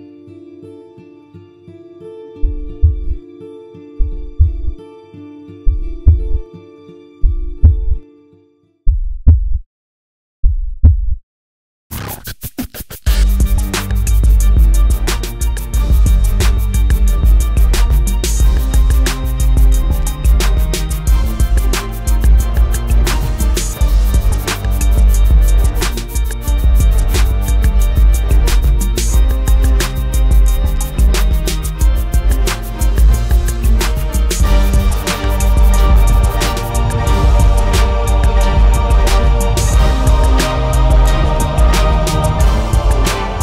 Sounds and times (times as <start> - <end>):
Music: 0.0 - 8.9, 11.9 - 43.4.